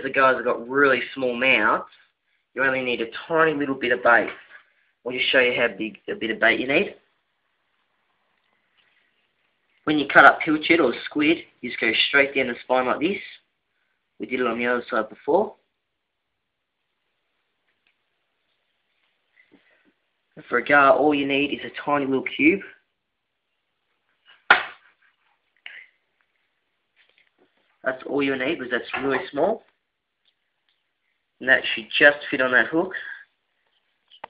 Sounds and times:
Speech: 0.0 - 2.0, 2.6 - 7.1, 9.8 - 13.5, 14.2 - 15.7, 20.4 - 22.9, 27.8 - 29.8, 31.4 - 33.3
Inside, small room: 0.0 - 34.2.

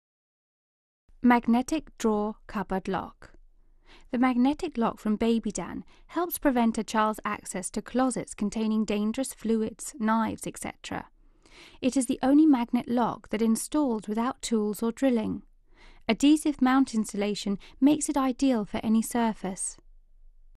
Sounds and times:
Speech: 1.2 - 3.3, 4.1 - 11.1, 11.8 - 15.4, 16.1 - 19.8.

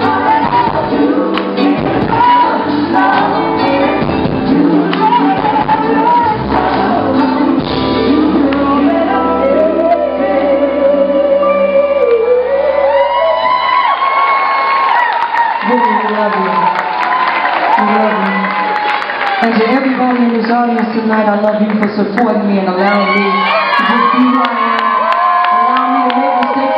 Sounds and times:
Singing: 0.0 - 13.8
Pop music: 0.0 - 14.0.

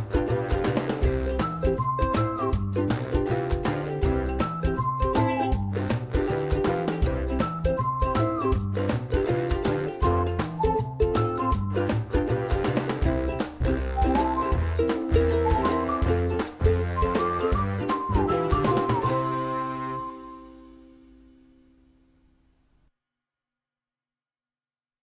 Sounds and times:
Music: 0.0 - 22.7.

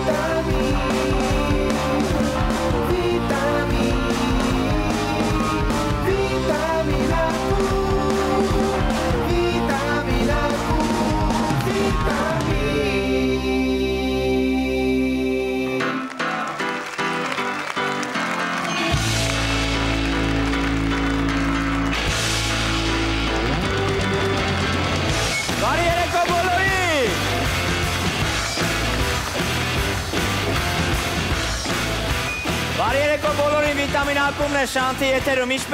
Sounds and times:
Music: 0.0 - 35.7.

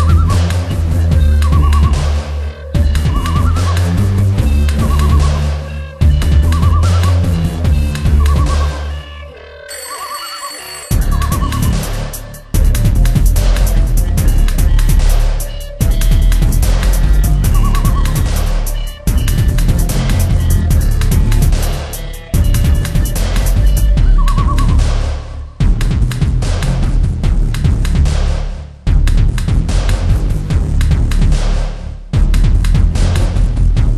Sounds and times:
Dubstep: 10.9 - 28.4.

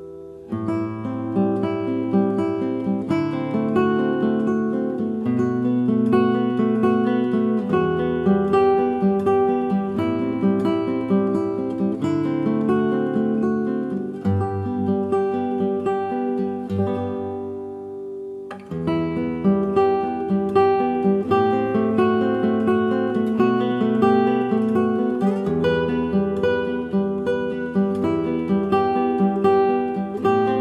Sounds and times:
Acoustic guitar: 0.0 - 30.6.

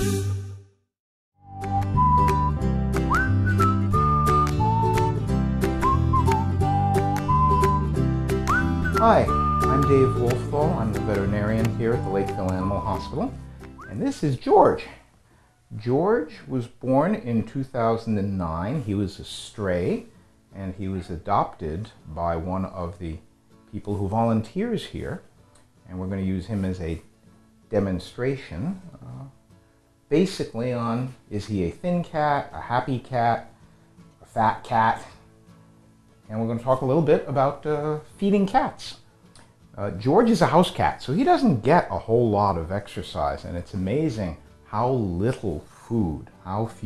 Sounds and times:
Music: 0.0 - 15.4, 19.6 - 46.8
Speech: 9.0 - 15.0, 15.7 - 25.3, 25.9 - 27.1, 27.7 - 29.4, 30.1 - 33.5, 34.2 - 35.2, 36.3 - 39.0, 39.8 - 46.8.

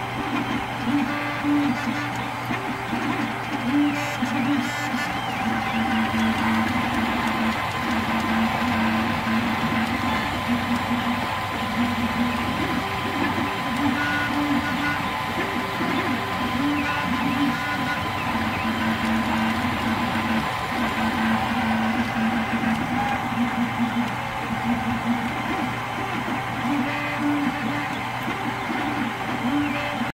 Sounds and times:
Printer: 0.0 - 30.1.

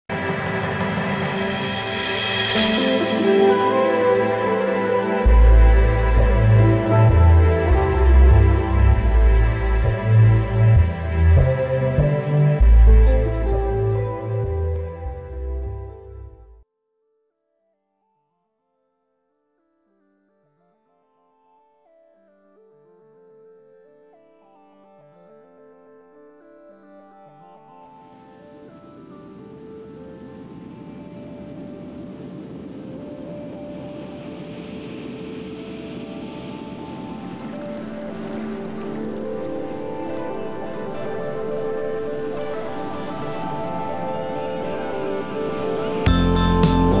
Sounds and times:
Background music: 0.1 - 16.6, 21.4 - 47.0.

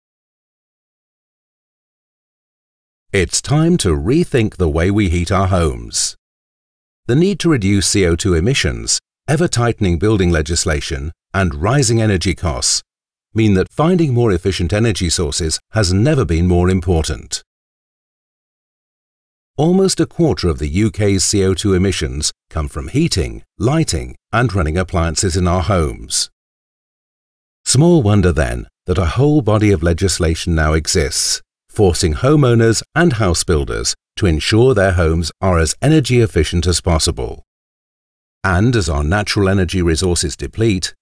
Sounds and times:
Speech: 3.2 - 6.2, 7.1 - 17.5, 19.6 - 26.4, 27.7 - 37.4, 38.5 - 41.0.

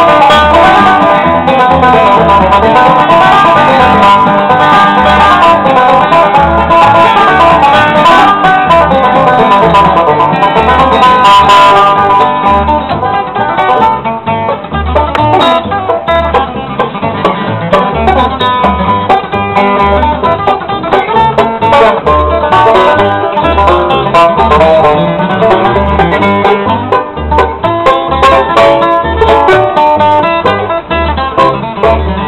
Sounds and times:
Banjo: 0.0 - 32.2
Bluegrass: 0.0 - 32.2
Guitar: 0.0 - 32.2.

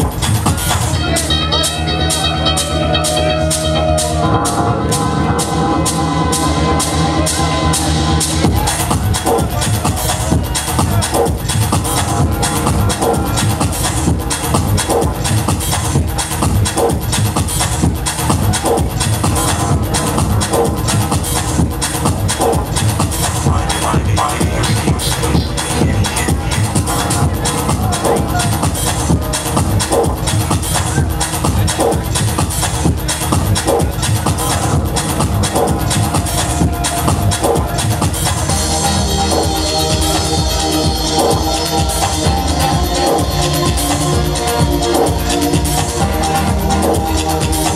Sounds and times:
Techno: 0.0 - 47.7.

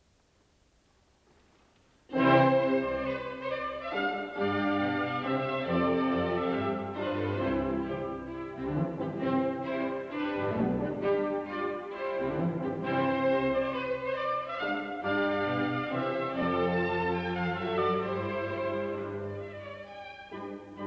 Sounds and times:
Cello: 2.1 - 20.8.

